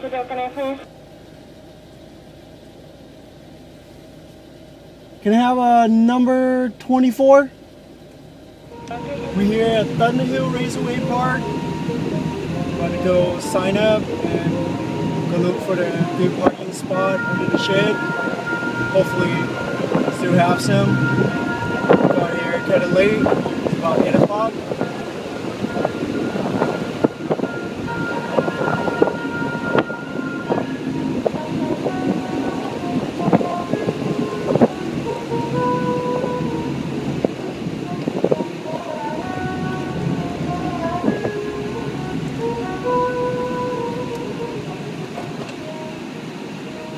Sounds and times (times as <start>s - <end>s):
Car: 0.0s - 46.9s
Outside, rural or natural: 0.0s - 46.9s
Music: 8.7s - 46.9s.